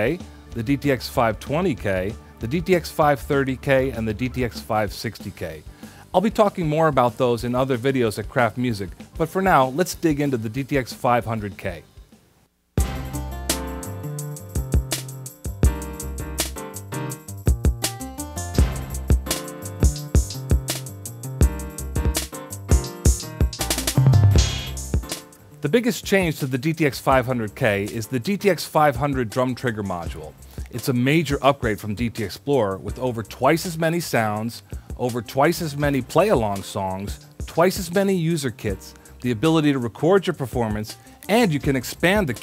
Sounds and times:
Drum kit: 0.0s - 12.2s, 12.8s - 39.7s, 40.6s - 42.4s
Drum roll: 12.8s - 16.6s, 17.5s - 25.3s
Bass drum: 12.8s - 25.3s
Rimshot: 23.1s - 25.2s.

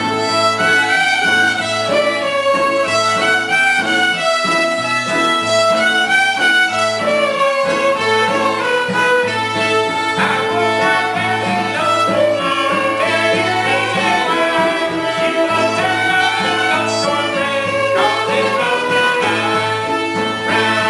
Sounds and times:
Pizzicato: 0.0s - 20.8s.

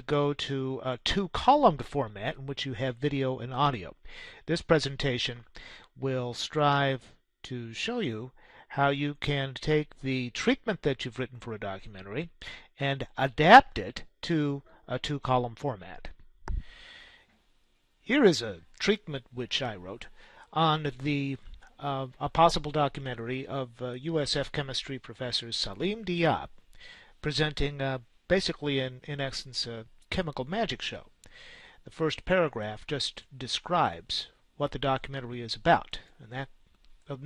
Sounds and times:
Speech: 0.0s - 16.2s, 18.1s - 26.6s, 27.2s - 31.1s, 31.8s - 37.2s.

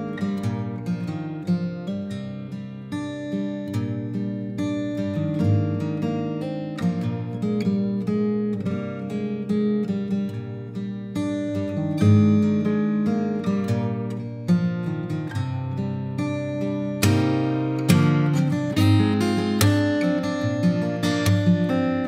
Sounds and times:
Acoustic guitar: 0.0s - 22.0s.

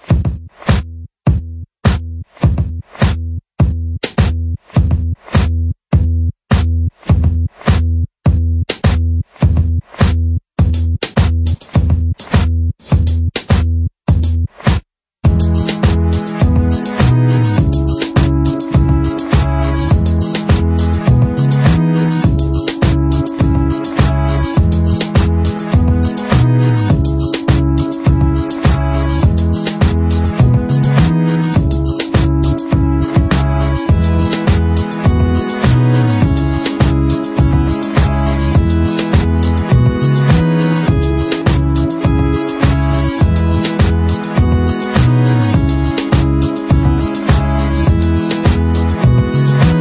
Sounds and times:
Music: 0.0s - 49.8s.

